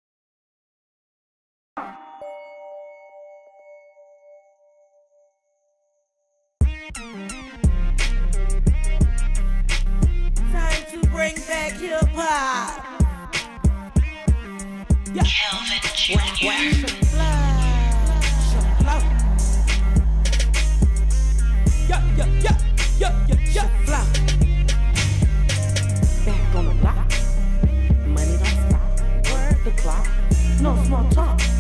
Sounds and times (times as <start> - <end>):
Music: 1.8 - 31.6.